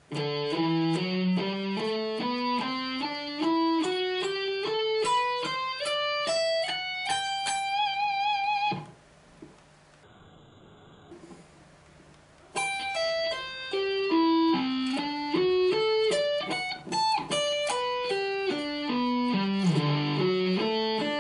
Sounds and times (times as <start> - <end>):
Electric guitar: 0.0 - 9.0, 12.5 - 21.2.